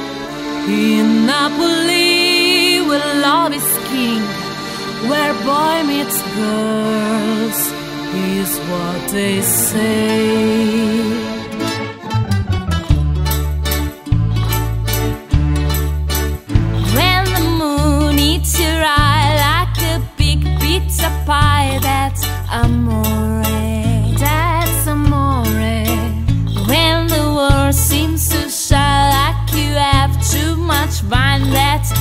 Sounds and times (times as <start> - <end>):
Background music: 0.0 - 32.0.